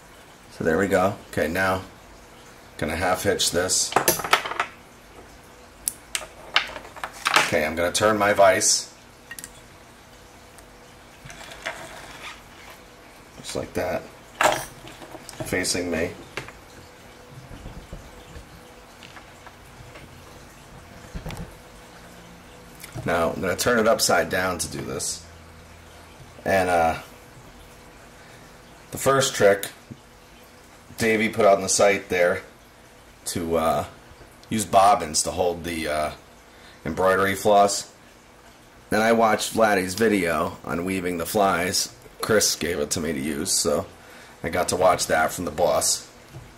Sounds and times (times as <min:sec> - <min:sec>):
Speech: 0:00.5 - 0:01.9, 0:02.8 - 0:04.0, 0:07.4 - 0:09.0, 0:13.4 - 0:14.1, 0:15.4 - 0:16.2, 0:23.0 - 0:25.3, 0:26.4 - 0:27.1, 0:28.9 - 0:29.8, 0:31.0 - 0:32.5, 0:33.2 - 0:36.2, 0:36.8 - 0:38.0, 0:38.9 - 0:46.1.